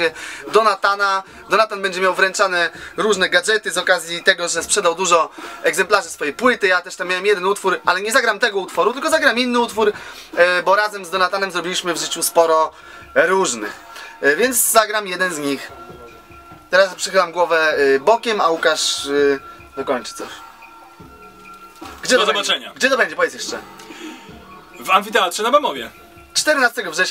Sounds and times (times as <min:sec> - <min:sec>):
Speech: 0:00.0 - 0:15.7, 0:16.7 - 0:20.4, 0:22.0 - 0:23.6, 0:24.8 - 0:27.1
Music: 0:00.0 - 0:27.1.